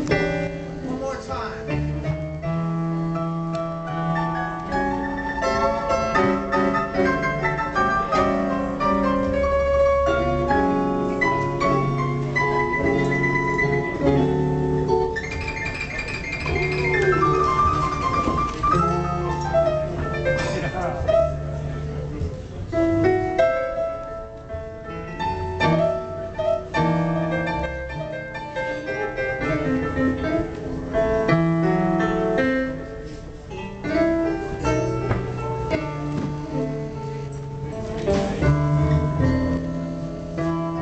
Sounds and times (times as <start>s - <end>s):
Music: 0.0s - 40.8s.